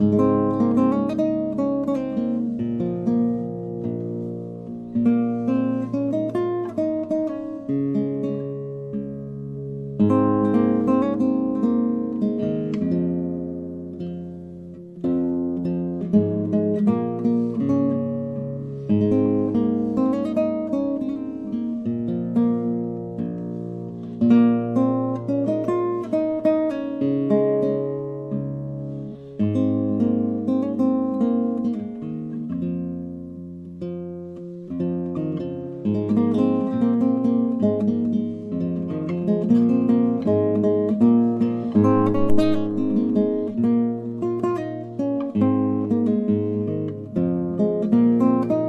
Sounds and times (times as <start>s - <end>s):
Acoustic guitar: 0.0s - 48.6s.